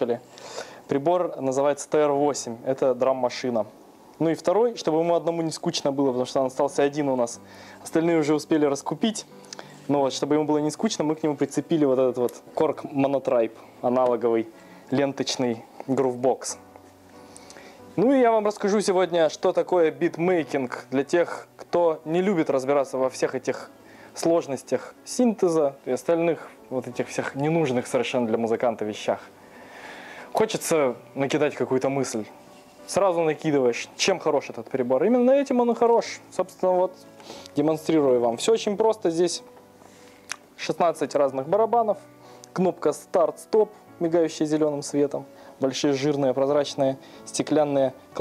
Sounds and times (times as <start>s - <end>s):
Speech: 0.0s - 0.2s, 0.9s - 9.3s, 9.9s - 16.6s, 18.0s - 29.3s, 30.4s - 32.3s, 32.9s - 37.0s, 37.6s - 39.5s, 40.6s - 42.0s, 42.6s - 48.2s.